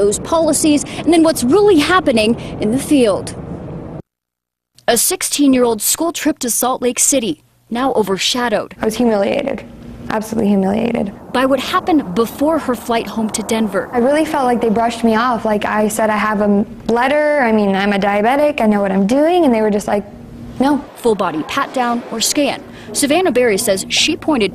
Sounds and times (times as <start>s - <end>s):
Speech: 0.0s - 3.4s, 4.9s - 20.0s, 20.6s - 24.5s.